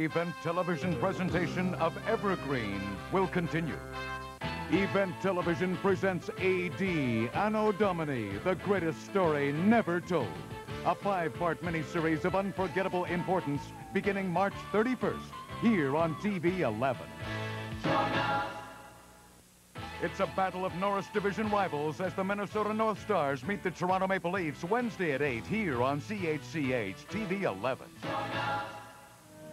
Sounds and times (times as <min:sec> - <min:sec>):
Speech: 0:00.0 - 0:03.8, 0:04.7 - 0:17.1, 0:20.0 - 0:27.9
Music: 0:00.0 - 0:29.5
Television: 0:00.0 - 0:29.5.